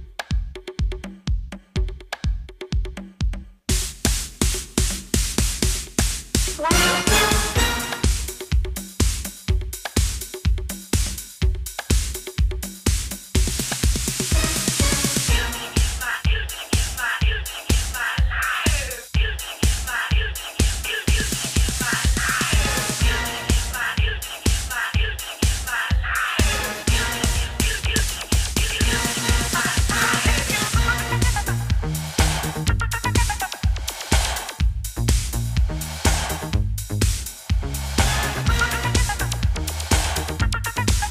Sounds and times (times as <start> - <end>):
Music: 0.0 - 41.1.